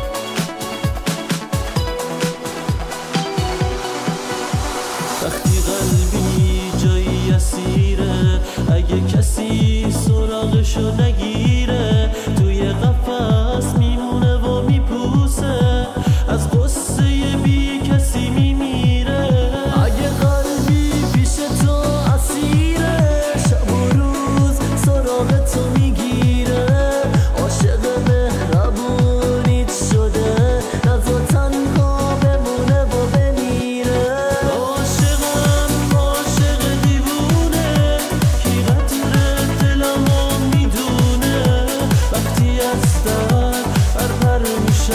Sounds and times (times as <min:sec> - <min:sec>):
Tender music: 0:00.0 - 0:44.9.